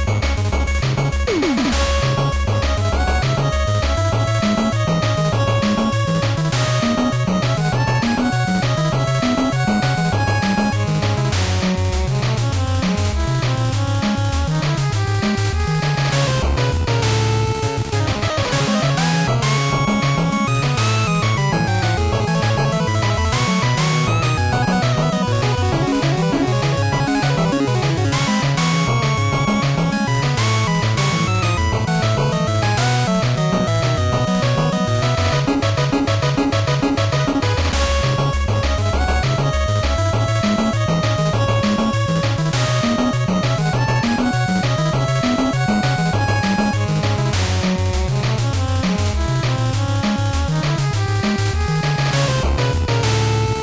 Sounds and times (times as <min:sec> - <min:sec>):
Soundtrack music: 0:00.0 - 0:53.6.